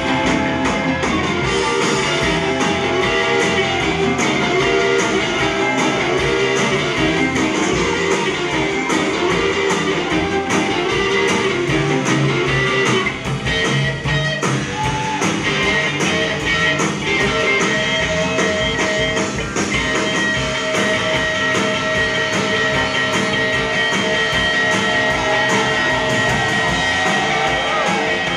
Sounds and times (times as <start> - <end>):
Bass guitar: 0.0 - 28.3.